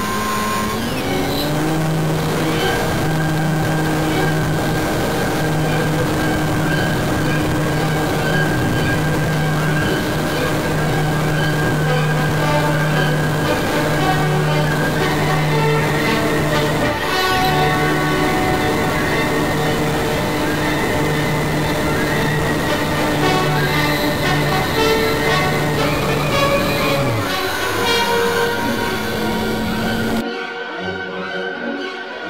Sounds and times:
Music: 0:00.0 - 0:32.3.

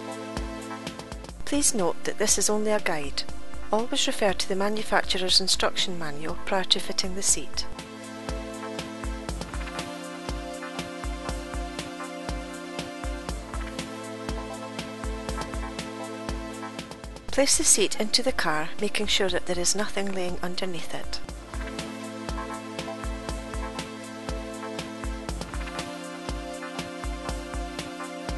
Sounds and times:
Music: 0:00.0 - 0:28.3
Speech: 0:01.4 - 0:07.7, 0:17.3 - 0:21.2.

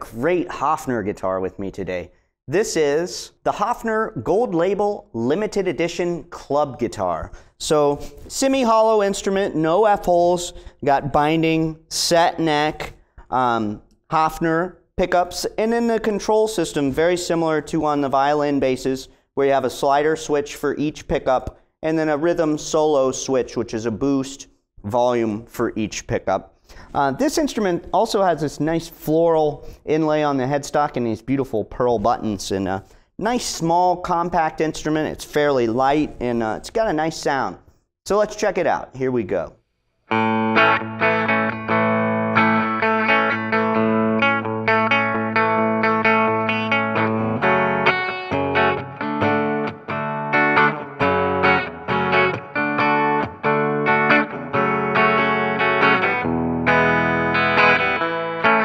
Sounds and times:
Speech: 0:00.0 - 0:39.6.

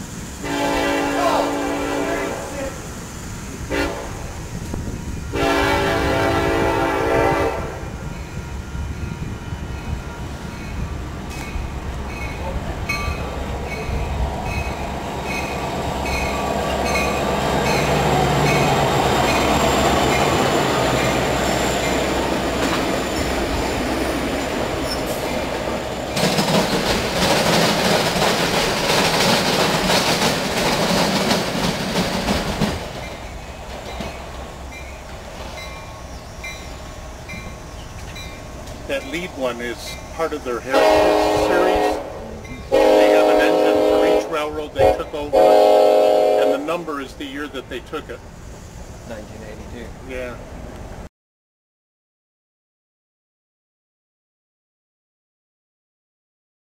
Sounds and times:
Railroad car, train wagon: 0:00.0 - 0:51.1
Train horn: 0:00.4 - 0:02.8, 0:03.7 - 0:04.3, 0:05.3 - 0:08.0, 0:40.6 - 0:46.8
Clickety-clack: 0:26.2 - 0:34.2.

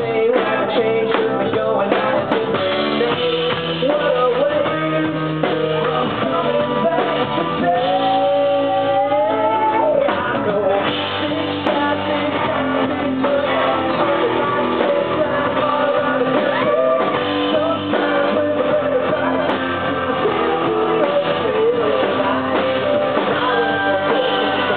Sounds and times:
Music: 0:00.0 - 0:24.7.

